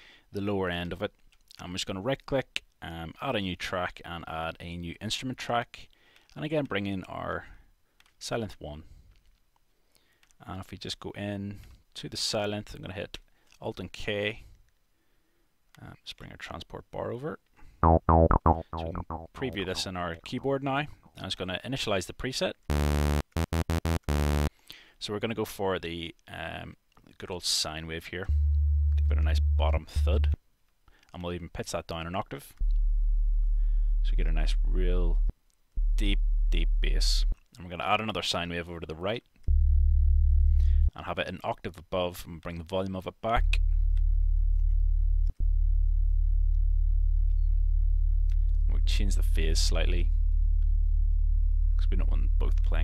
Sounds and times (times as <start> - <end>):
Speech: 0.3 - 7.6, 8.2 - 8.9, 10.4 - 14.4, 15.8 - 17.4, 18.7 - 22.6, 25.0 - 28.3, 29.1 - 30.4, 31.1 - 32.6, 34.0 - 35.2, 36.0 - 39.3, 40.9 - 43.6, 48.7 - 50.2, 51.8 - 52.8
Electronic music: 17.8 - 20.8, 22.7 - 24.5, 28.4 - 30.4.